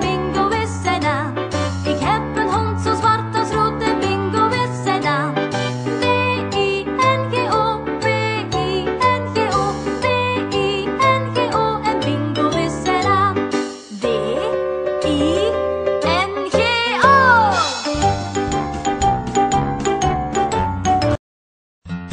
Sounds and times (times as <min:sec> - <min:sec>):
Music for children: 0:00.0 - 0:21.2.